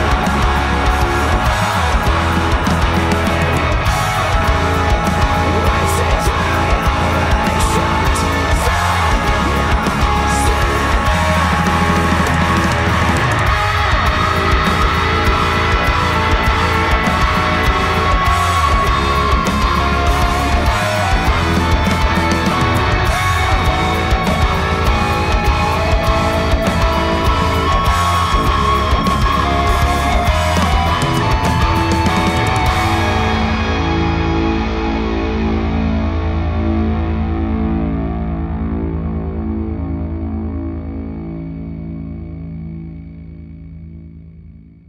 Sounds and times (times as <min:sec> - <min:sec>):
Distortion: 0:00.0 - 0:44.8
Guitar: 0:00.0 - 0:44.8.